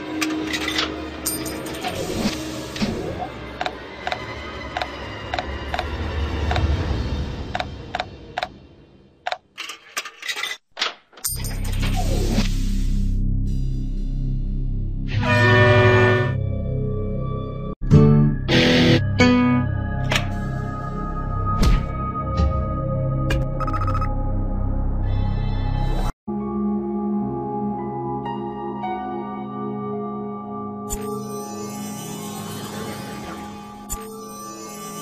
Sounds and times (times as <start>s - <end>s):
New-age music: 0.0s - 9.0s, 11.8s - 35.0s.